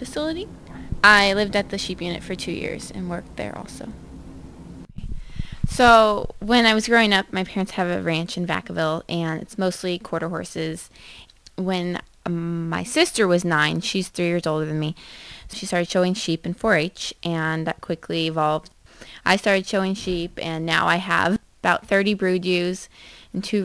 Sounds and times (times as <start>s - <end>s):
Speech: 0.0s - 4.0s, 5.7s - 10.9s, 11.6s - 23.6s.